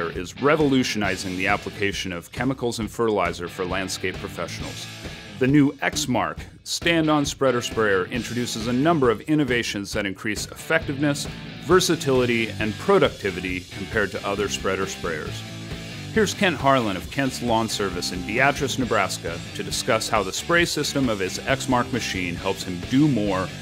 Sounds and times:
Speech: 0:00.0 - 0:15.4, 0:16.2 - 0:23.6
Music: 0:00.0 - 0:23.6.

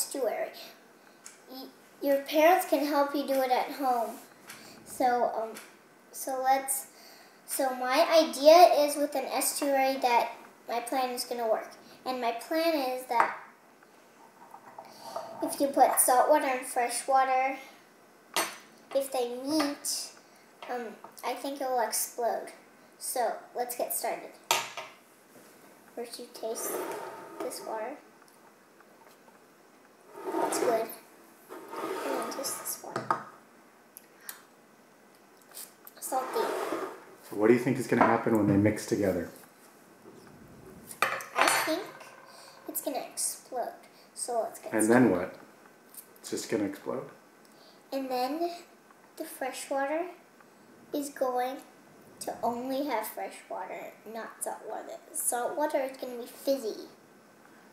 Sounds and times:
Speech: 0:07.5 - 0:13.3, 0:19.0 - 0:24.4, 0:26.0 - 0:26.8, 0:37.3 - 0:39.4, 0:46.2 - 0:47.2, 0:49.2 - 0:50.2, 0:51.0 - 0:57.0.

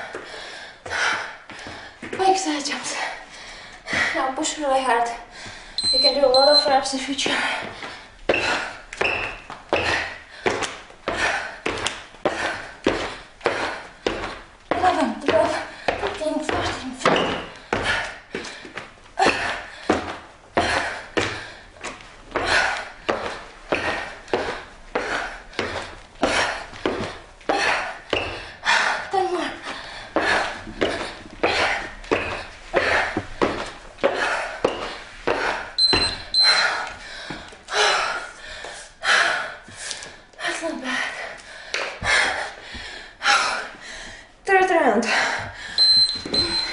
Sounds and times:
Speech: 0:02.2 - 0:03.2, 0:04.1 - 0:05.3, 0:06.0 - 0:07.5, 0:14.8 - 0:17.1, 0:29.1 - 0:29.6, 0:40.4 - 0:41.0, 0:44.5 - 0:45.2.

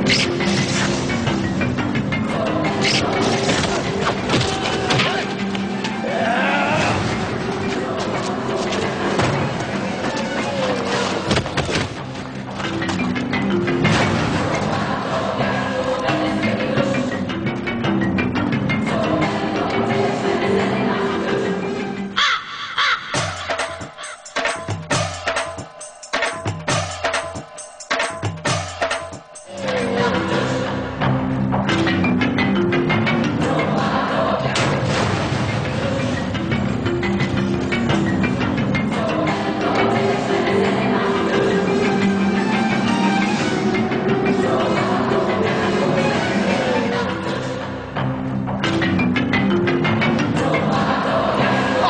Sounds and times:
Music: 0:00.0 - 0:51.8.

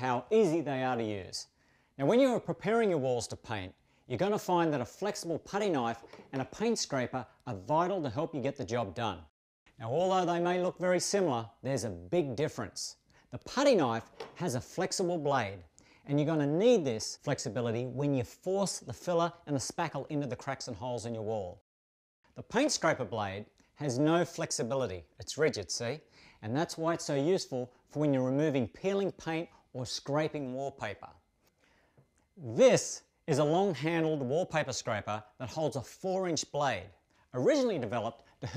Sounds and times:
Speech: 0:00.0 - 0:21.6, 0:22.4 - 0:31.2, 0:32.4 - 0:38.5.

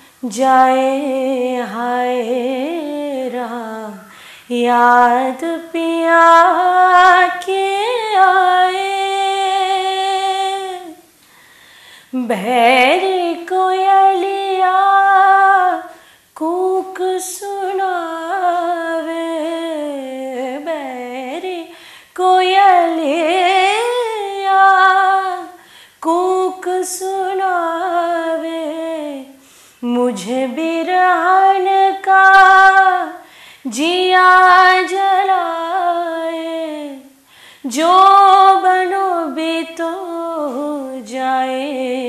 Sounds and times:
Inside, small room: 0:00.0 - 0:42.0.

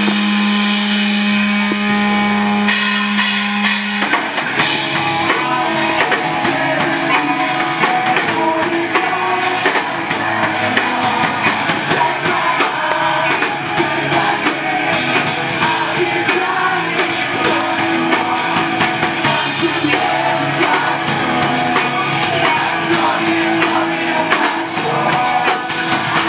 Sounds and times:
Music: 0:00.0 - 0:26.2.

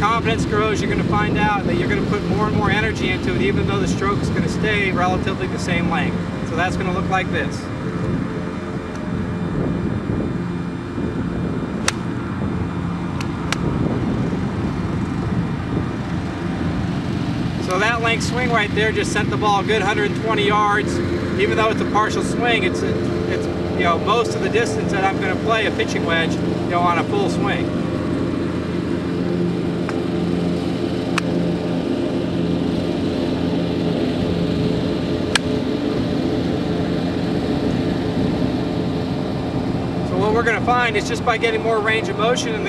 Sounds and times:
Outside, urban or manmade: 0:00.0 - 0:42.6.

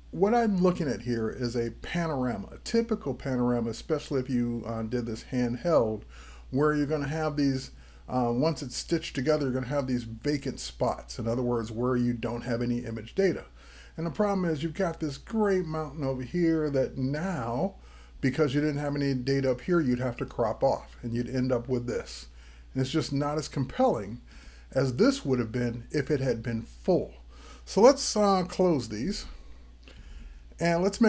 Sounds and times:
Speech: 0:00.1 - 0:29.4, 0:30.6 - 0:31.0.

